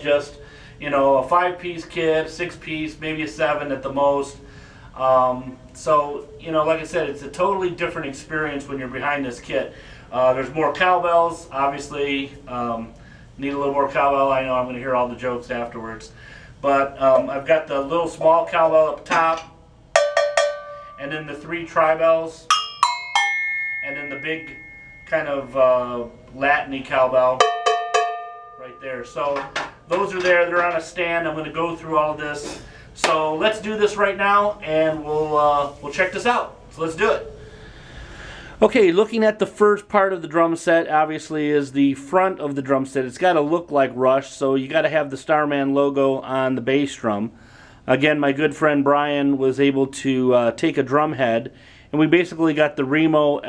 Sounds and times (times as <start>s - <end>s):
Cymbal: 20.0s - 21.4s.